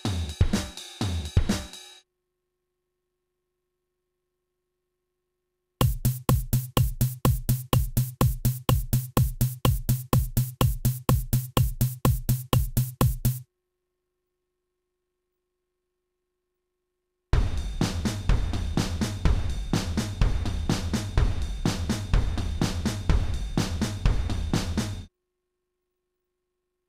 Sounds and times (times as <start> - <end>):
Drum kit: 0.0 - 2.0, 5.8 - 13.4, 17.4 - 25.1
Bass drum: 5.8 - 13.4, 17.4 - 25.1.